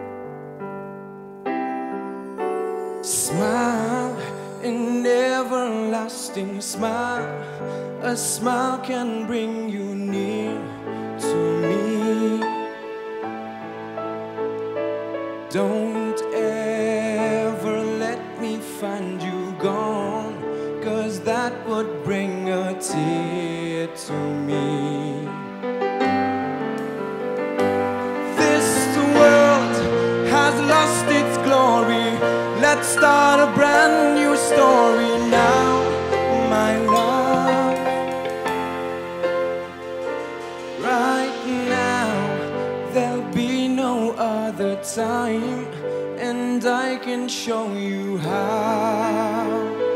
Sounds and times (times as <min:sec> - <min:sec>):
Music: 0:00.0 - 0:49.9.